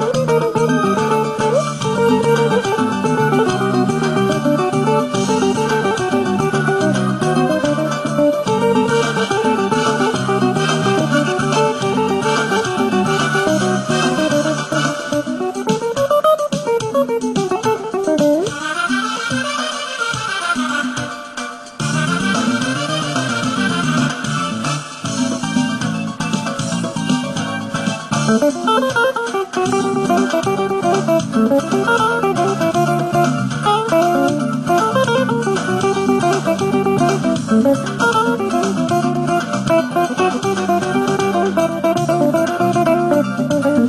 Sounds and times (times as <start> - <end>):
Guitar: 0.0 - 43.8
Inside, small room: 0.0 - 43.8.